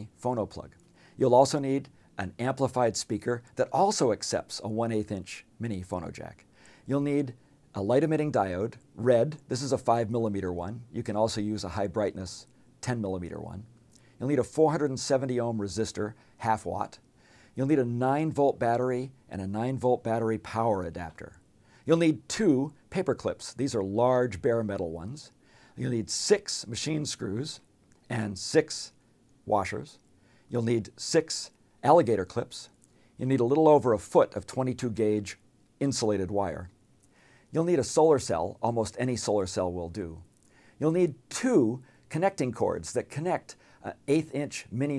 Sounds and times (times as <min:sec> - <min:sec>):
Speech: 0:00.0 - 0:17.0, 0:17.6 - 0:36.8, 0:37.5 - 0:44.9.